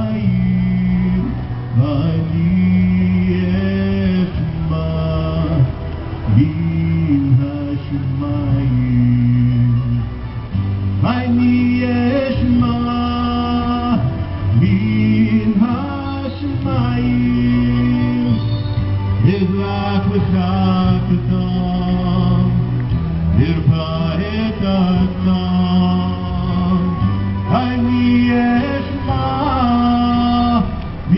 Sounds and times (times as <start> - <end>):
Male singing: 0.0 - 10.1, 11.0 - 18.6, 19.2 - 22.7, 23.4 - 31.1
Music: 0.0 - 31.1.